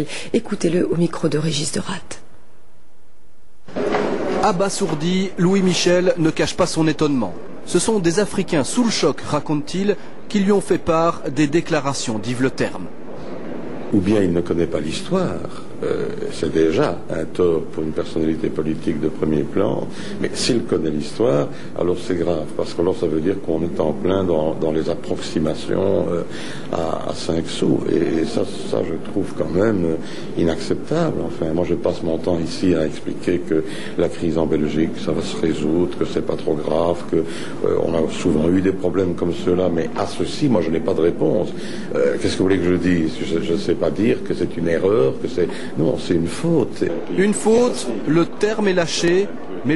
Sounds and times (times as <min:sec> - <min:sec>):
Speech: 0:04.4 - 0:12.9, 0:14.0 - 0:49.7.